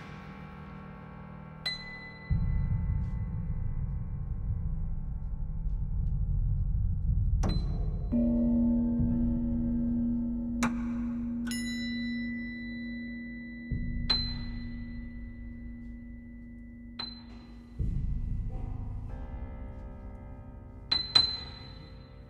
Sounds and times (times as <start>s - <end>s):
Percussion: 0.0s - 22.3s.